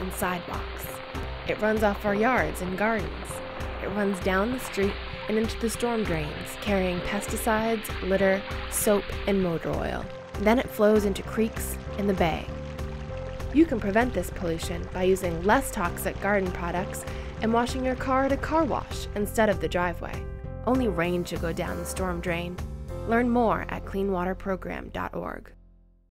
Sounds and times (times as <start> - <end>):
Speech: 0.0 - 0.9, 1.5 - 12.5, 13.6 - 25.6
Stream: 0.0 - 19.9
Music: 0.0 - 26.1.